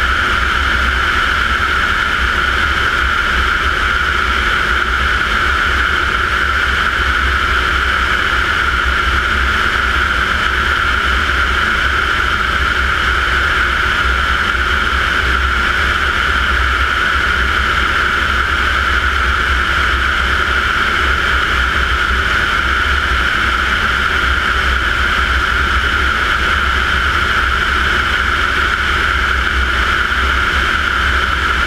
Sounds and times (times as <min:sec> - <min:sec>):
Fixed-wing aircraft, airplane: 0:00.0 - 0:31.6
Heavy engine (low frequency): 0:00.0 - 0:31.6
Jet engine: 0:00.0 - 0:31.6
Propeller, airscrew: 0:00.0 - 0:31.6.